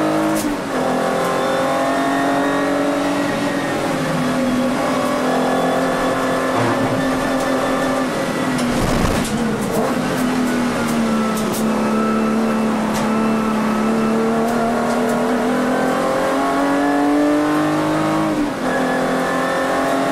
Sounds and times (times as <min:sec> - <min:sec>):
Race car, auto racing: 0:00.0 - 0:20.1.